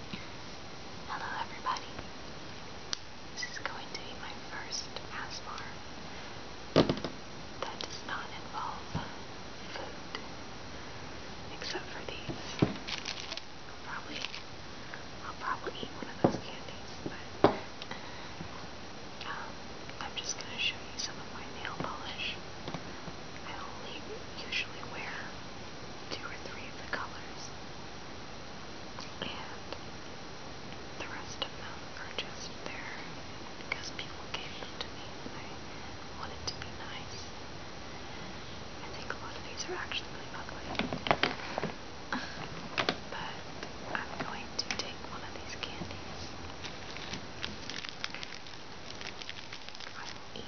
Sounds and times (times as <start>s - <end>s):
Whispering: 1.1s - 2.1s, 3.4s - 5.8s, 7.6s - 10.2s, 11.5s - 12.7s, 13.8s - 14.4s, 15.2s - 17.4s, 19.2s - 22.4s, 23.4s - 25.4s, 26.1s - 27.6s, 29.1s - 29.8s, 31.0s - 35.6s, 36.2s - 37.4s, 38.8s - 40.8s, 43.1s - 46.4s, 49.8s - 50.4s.